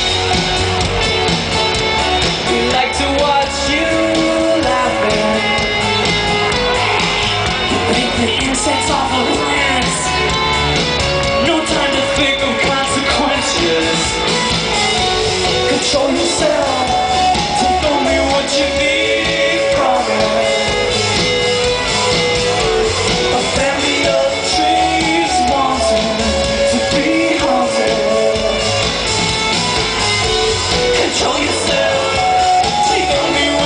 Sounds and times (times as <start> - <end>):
Music: 0.0 - 33.6
Male singing: 2.5 - 5.7, 7.7 - 10.3, 11.4 - 14.2, 15.5 - 20.9, 23.3 - 28.8, 30.9 - 33.6.